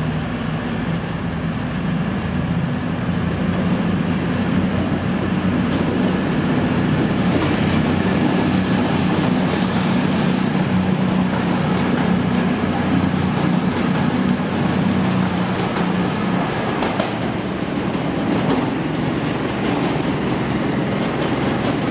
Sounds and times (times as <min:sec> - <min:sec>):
Railroad car, train wagon: 0:00.0 - 0:21.9
Subway, metro, underground: 0:00.0 - 0:21.9
Train: 0:00.0 - 0:21.9.